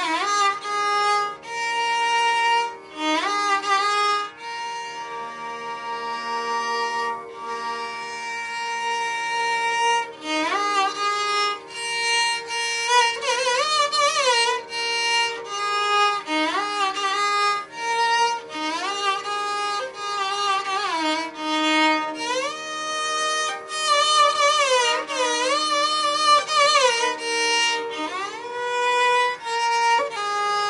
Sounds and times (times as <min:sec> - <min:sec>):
Violin, fiddle: 0:00.0 - 0:30.7.